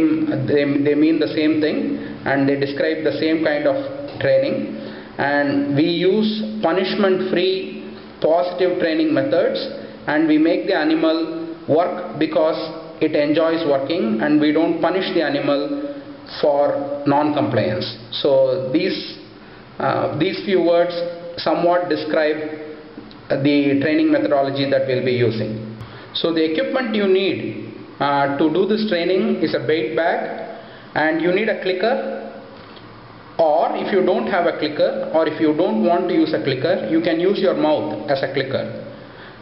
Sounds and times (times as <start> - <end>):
Speech: 0.0 - 22.7, 23.3 - 32.3, 33.4 - 38.9.